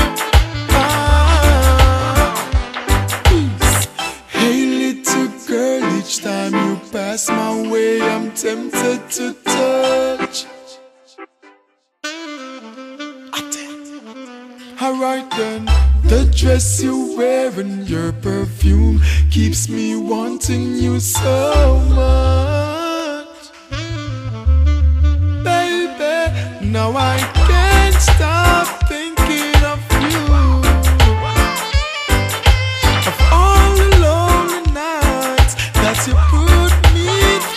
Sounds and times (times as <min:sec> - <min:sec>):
Reggae: 0:00.0 - 0:37.5.